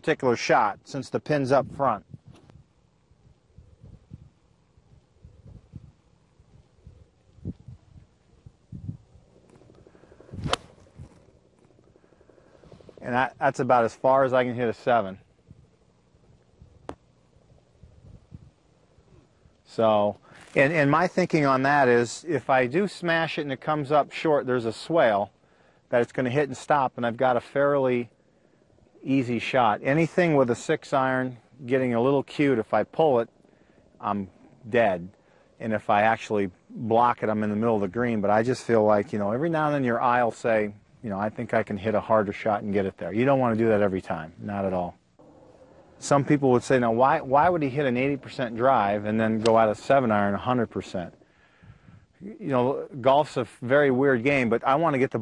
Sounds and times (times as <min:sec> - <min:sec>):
Speech: 0:00.0 - 0:02.1, 0:13.0 - 0:15.3, 0:19.6 - 0:28.1, 0:29.0 - 0:33.3, 0:34.0 - 0:45.0, 0:46.0 - 0:51.2, 0:52.2 - 0:55.2.